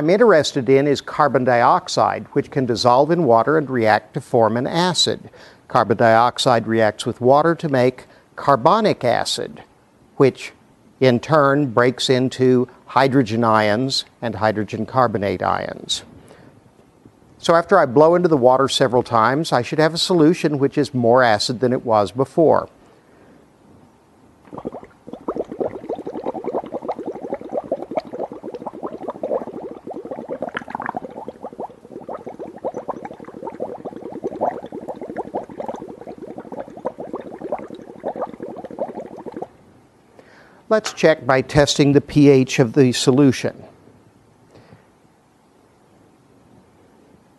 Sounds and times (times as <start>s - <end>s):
Speech: 0.0s - 16.1s, 17.4s - 22.8s, 40.7s - 43.8s.